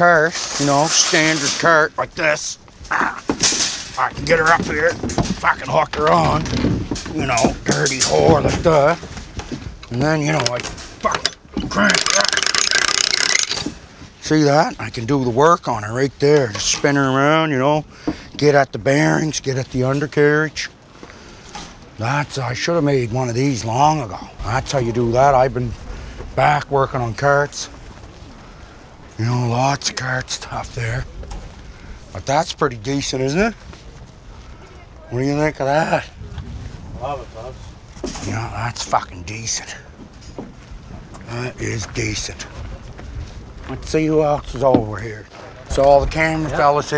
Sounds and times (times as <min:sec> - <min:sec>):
Speech: 0:00.0 - 0:03.2, 0:04.0 - 0:06.5, 0:07.1 - 0:09.0, 0:09.9 - 0:12.3, 0:22.0 - 0:25.8, 0:26.4 - 0:27.8, 0:29.2 - 0:31.1, 0:32.2 - 0:33.6, 0:38.2 - 0:39.9, 0:41.3 - 0:42.7, 0:43.7 - 0:46.9
Outside, urban or manmade: 0:00.0 - 0:46.9.